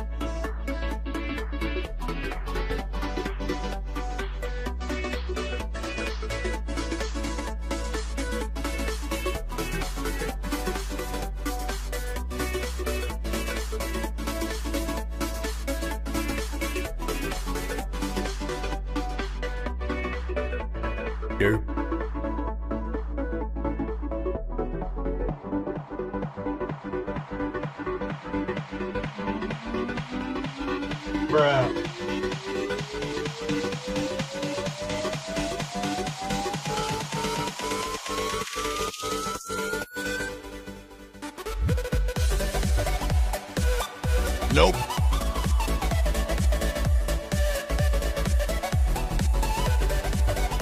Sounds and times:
Music: 0.0s - 50.6s.

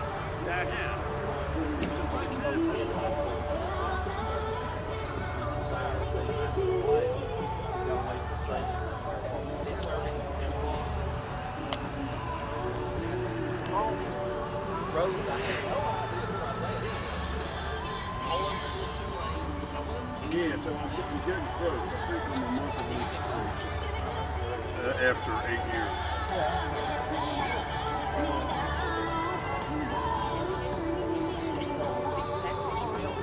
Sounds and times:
Music: 0.0s - 33.2s
Speech: 0.0s - 33.2s.

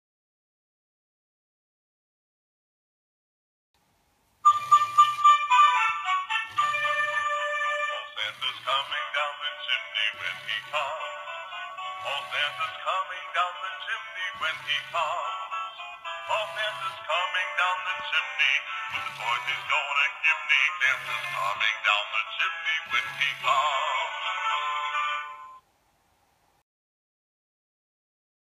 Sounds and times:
Music: 4.4s - 25.6s
Male singing: 8.0s - 25.5s.

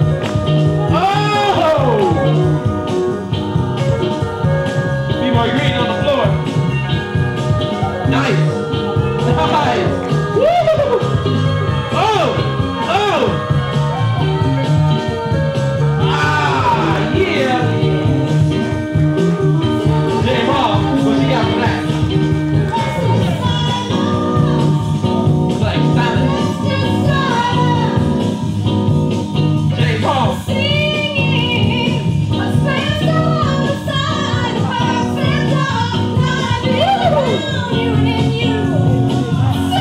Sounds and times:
Music: 0.0s - 39.8s.

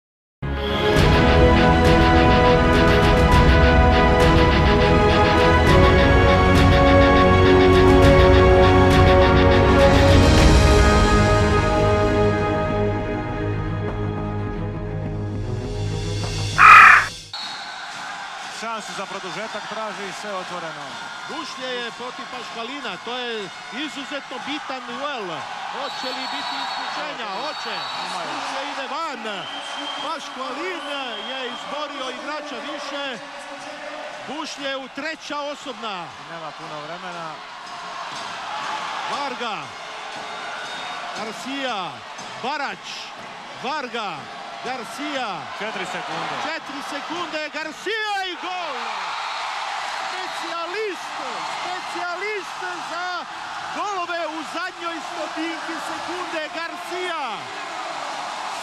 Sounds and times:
Speech: 18.5s - 37.4s, 39.1s - 39.7s, 41.2s - 48.9s, 50.1s - 57.5s.

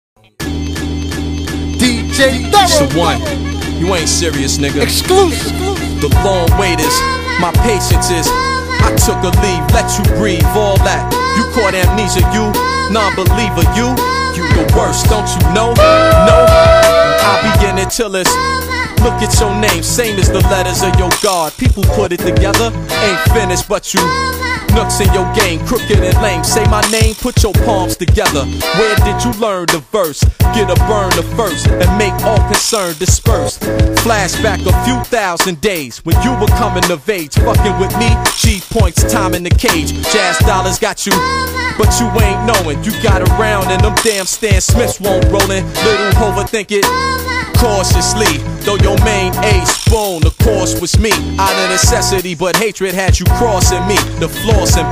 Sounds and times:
Hip hop music: 0.2s - 54.9s
Male speech, man speaking: 1.8s - 7.0s
Rapping: 1.8s - 54.9s.

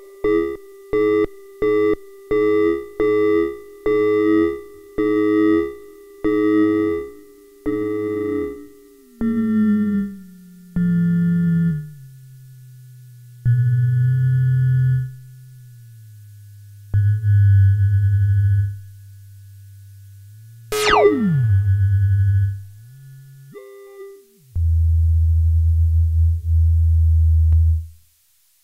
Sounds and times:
Synthesizer: 20.8s - 21.7s.

